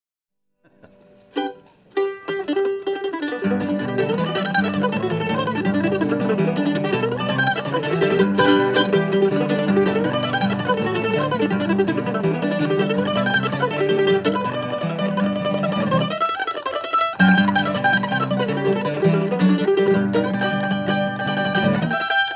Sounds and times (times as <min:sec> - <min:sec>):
Ukulele: 0:00.7 - 0:22.3.